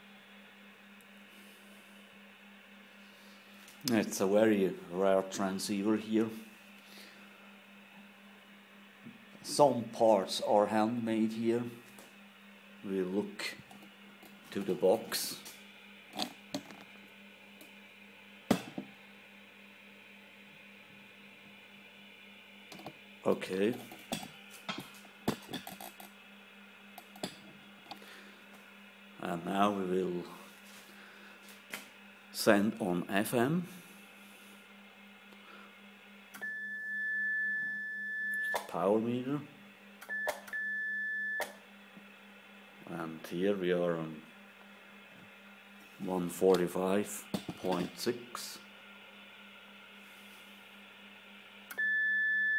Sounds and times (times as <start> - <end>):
Speech: 3.8 - 6.4, 9.4 - 11.8, 12.8 - 13.6, 14.5 - 15.5, 23.3 - 23.8, 29.2 - 30.5, 32.3 - 33.8, 38.6 - 39.5, 42.8 - 44.3, 46.0 - 48.7.